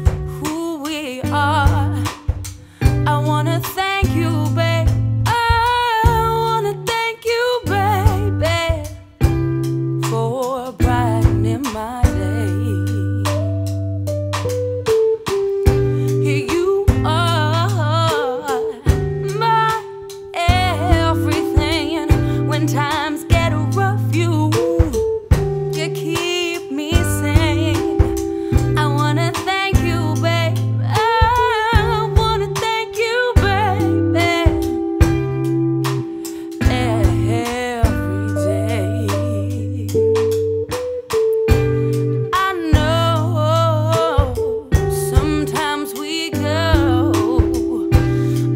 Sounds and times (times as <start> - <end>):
Music: 0.0 - 48.5.